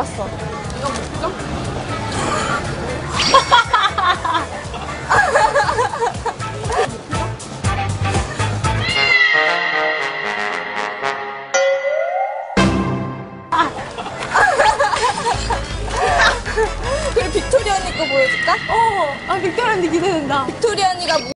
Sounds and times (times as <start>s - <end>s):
Music: 0.0s - 11.6s, 12.6s - 13.6s, 15.1s - 19.8s.